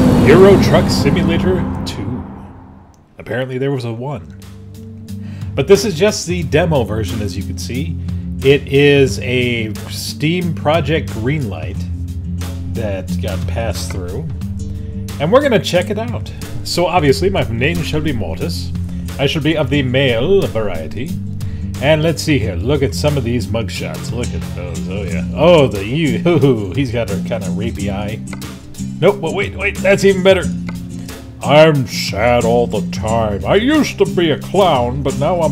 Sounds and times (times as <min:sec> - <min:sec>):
Music: 0:00.0 - 0:35.5
Speech: 0:00.1 - 0:02.2, 0:03.2 - 0:04.3, 0:05.6 - 0:11.9, 0:12.8 - 0:14.4, 0:15.2 - 0:21.2, 0:21.8 - 0:28.2, 0:29.0 - 0:30.5, 0:31.4 - 0:35.5.